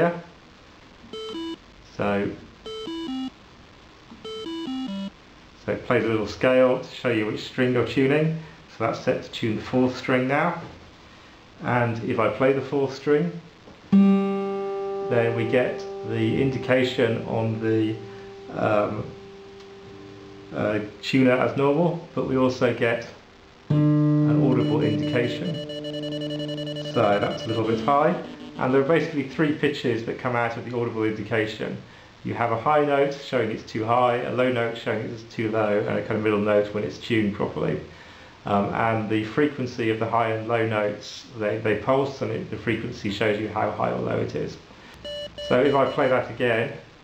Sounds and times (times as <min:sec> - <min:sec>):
Speech: 0:00.0 - 0:00.4, 0:01.9 - 0:02.5, 0:05.6 - 0:10.8, 0:11.6 - 0:13.5, 0:15.1 - 0:19.2, 0:20.5 - 0:23.2, 0:24.3 - 0:25.7, 0:26.9 - 0:37.9, 0:38.5 - 0:44.7, 0:45.4 - 0:46.9
Electronic tuner: 0:01.0 - 0:01.8, 0:02.5 - 0:05.2, 0:13.6 - 0:21.6, 0:23.3 - 0:29.7, 0:44.9 - 0:46.3.